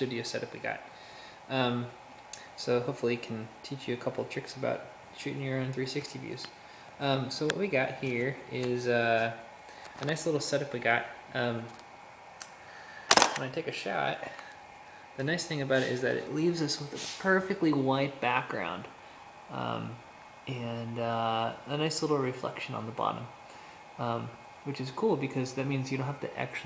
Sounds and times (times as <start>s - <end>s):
Speech: 0.0s - 0.9s, 1.5s - 2.0s, 2.6s - 9.4s, 10.0s - 11.8s, 13.4s - 14.5s, 15.2s - 18.9s, 19.5s - 23.4s, 24.0s - 26.6s
Inside, small room: 0.0s - 26.6s.